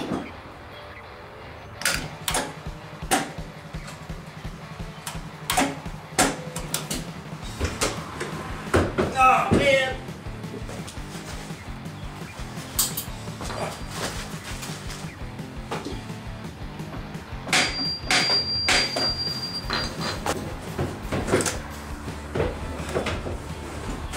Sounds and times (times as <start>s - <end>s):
Music: 0.0s - 24.1s
Speech: 9.0s - 10.1s.